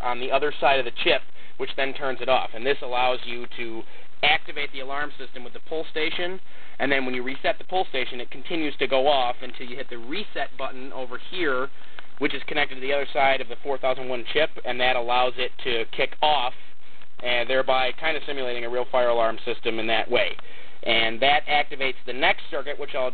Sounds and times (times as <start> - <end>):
Speech: 0.0 - 16.6, 17.2 - 23.1.